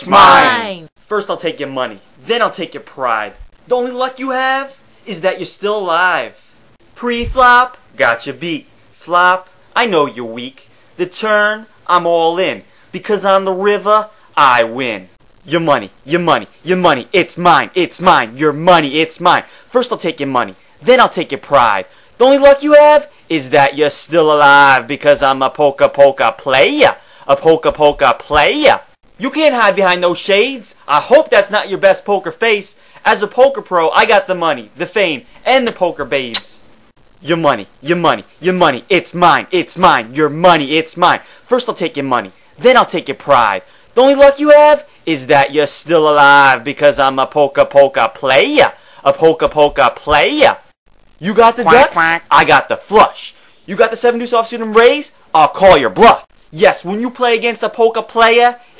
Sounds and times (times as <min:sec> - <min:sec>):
Speech: 0:00.0 - 0:06.4, 0:07.0 - 0:36.6, 0:37.2 - 0:58.6.